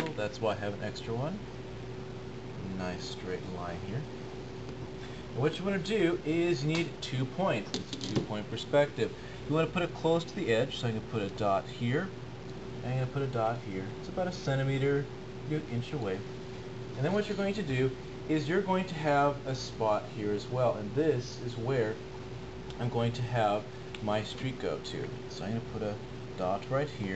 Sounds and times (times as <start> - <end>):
Speech: 0.0 - 1.5, 2.6 - 4.1, 5.4 - 12.2, 12.8 - 16.2, 17.0 - 22.0, 22.7 - 27.1.